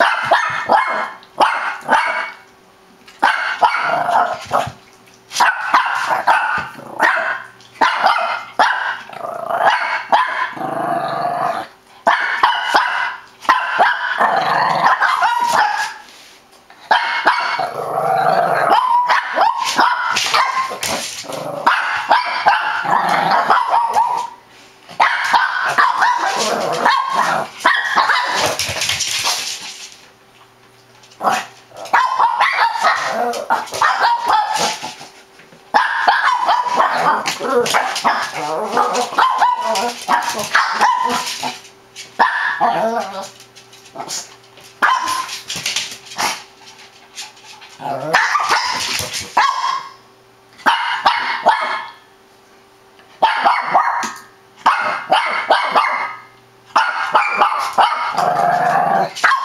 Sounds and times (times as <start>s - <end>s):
Bark: 0.0s - 2.4s, 3.2s - 4.4s, 5.4s - 10.6s, 12.1s - 14.2s, 14.8s - 16.0s, 16.9s - 17.6s, 18.7s - 20.8s, 21.6s - 24.4s, 25.0s - 28.6s, 31.3s - 34.8s, 35.8s - 37.2s, 37.8s - 41.3s, 42.2s - 42.8s, 44.8s - 45.3s, 48.1s - 50.0s, 50.6s - 52.0s, 53.2s - 58.2s, 59.2s - 59.4s.